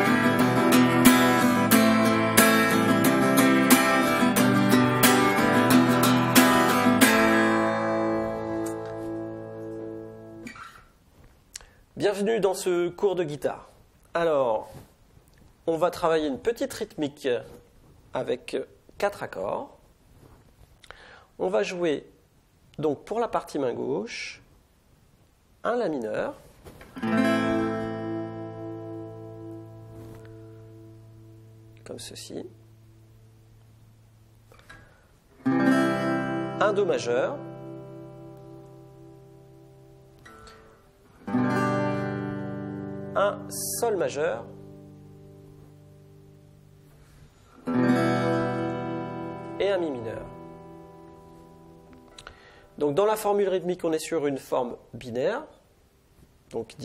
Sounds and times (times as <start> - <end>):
Speech: 12.0 - 14.8, 15.6 - 19.8, 21.4 - 22.2, 22.8 - 24.5, 25.6 - 26.4, 31.8 - 32.6, 36.6 - 37.5, 43.2 - 44.6, 49.6 - 50.4, 52.8 - 55.6, 56.5 - 56.8.